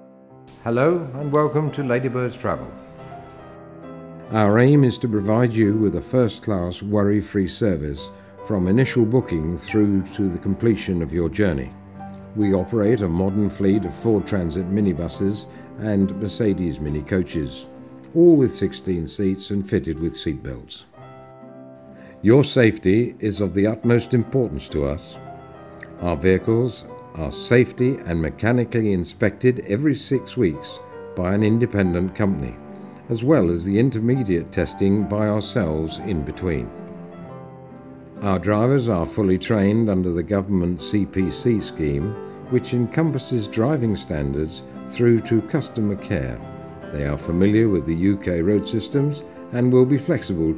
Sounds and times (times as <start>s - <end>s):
Music: 0.0s - 50.5s
Speech: 0.6s - 2.8s, 4.3s - 21.0s, 22.2s - 25.2s, 25.8s - 36.7s, 38.2s - 50.5s.